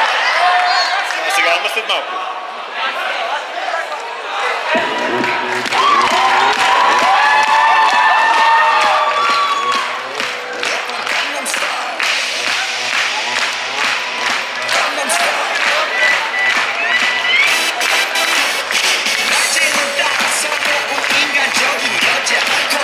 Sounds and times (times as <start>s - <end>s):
Cheering: 0.0s - 22.8s
Music: 4.7s - 22.8s.